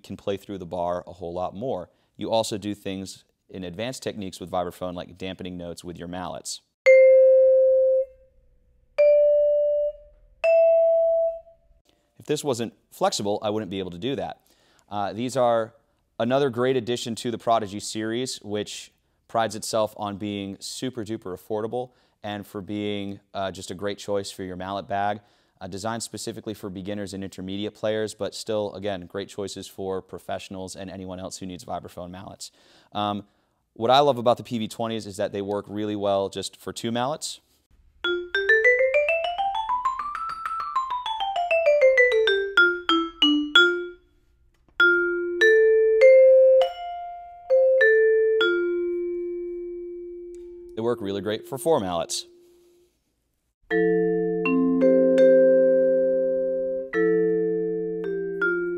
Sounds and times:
Speech: 0.0s - 6.7s, 12.2s - 37.4s, 50.8s - 52.3s
Vibraphone: 6.9s - 8.3s, 9.0s - 11.6s, 38.1s - 44.0s, 44.8s - 52.4s, 53.7s - 58.7s.

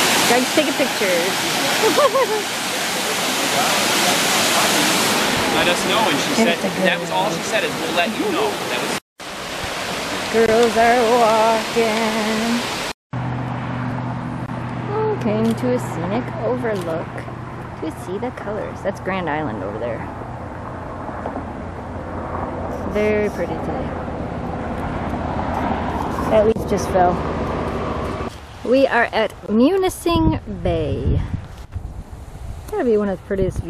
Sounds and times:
Outside, rural or natural: 0.0s - 33.6s
Speech: 5.6s - 9.0s, 10.4s - 12.6s, 14.9s - 17.2s, 17.8s - 20.1s, 22.9s - 23.9s, 26.3s - 27.2s, 28.7s - 31.2s, 32.7s - 33.6s.

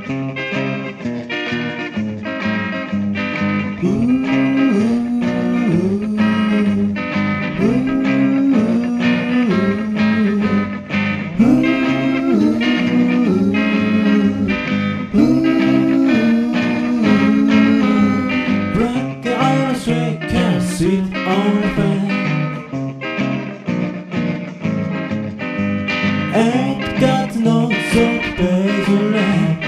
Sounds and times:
Music: 0.0s - 29.6s.

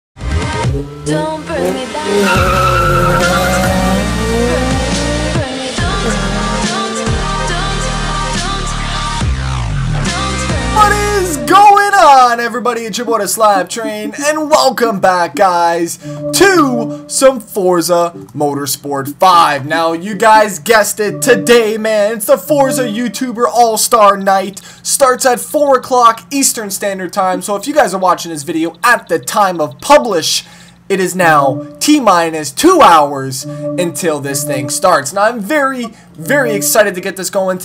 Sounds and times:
Race car, auto racing: 0.5s - 7.0s
Tire squeal: 2.0s - 4.8s.

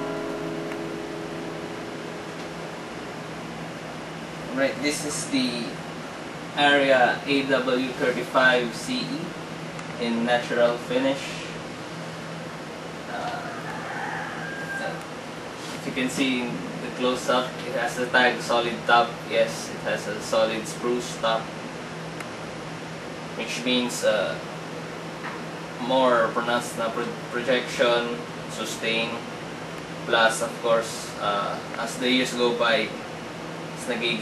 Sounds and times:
Speech: 4.5s - 5.8s, 6.6s - 9.4s, 10.0s - 11.6s, 13.1s - 13.6s, 14.8s - 15.0s, 15.7s - 21.5s, 23.4s - 24.4s, 25.8s - 29.3s, 30.1s - 33.0s, 33.8s - 34.2s.

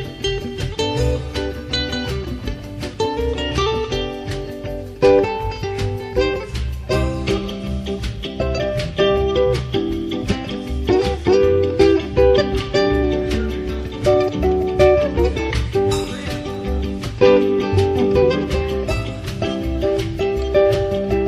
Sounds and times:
Flamenco: 0.0s - 21.2s
Guitar: 0.0s - 21.2s
Ukulele: 0.0s - 21.2s.

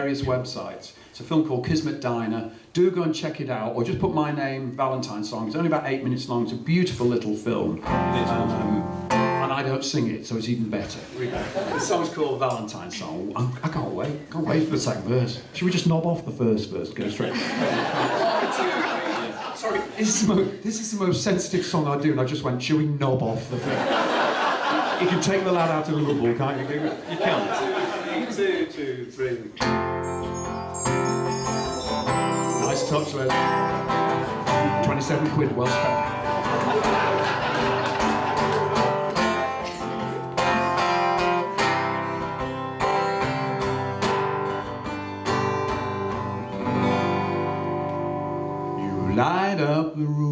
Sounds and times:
Speech: 0.0s - 8.8s, 9.4s - 17.4s, 19.5s - 23.7s, 25.0s - 29.6s, 32.6s - 33.4s, 34.6s - 36.0s, 48.8s - 50.3s
Inside, large room or hall: 0.0s - 50.3s
Music: 7.8s - 9.8s, 29.6s - 49.4s.

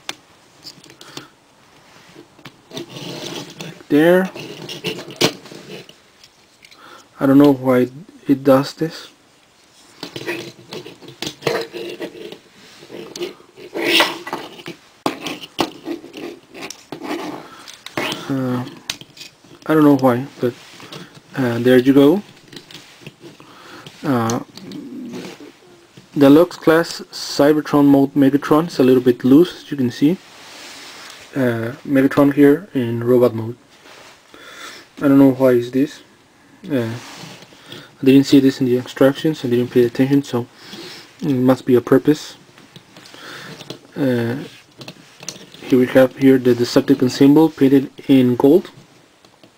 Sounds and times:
Inside, small room: 0.0s - 49.5s.

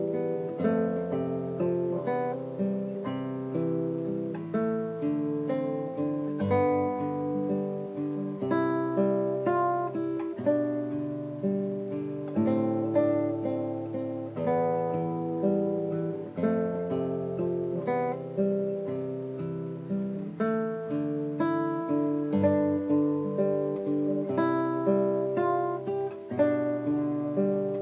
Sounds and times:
Acoustic guitar: 0.0s - 27.8s
Strum: 0.0s - 27.8s.

